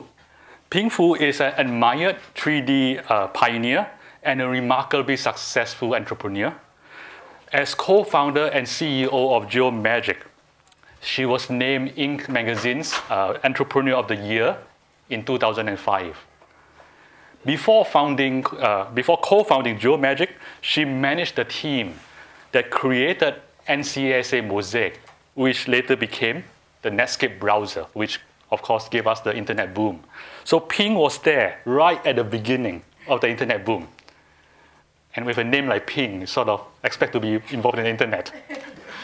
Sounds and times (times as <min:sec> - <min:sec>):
Speech: 0:00.7 - 0:06.7, 0:07.5 - 0:10.4, 0:11.0 - 0:16.3, 0:17.4 - 0:34.0, 0:35.1 - 0:38.7.